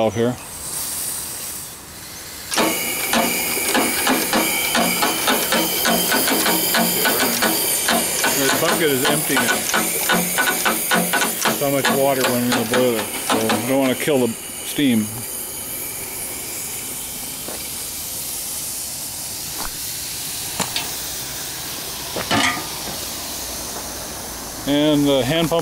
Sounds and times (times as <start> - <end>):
Hiss: 0.5 - 25.6.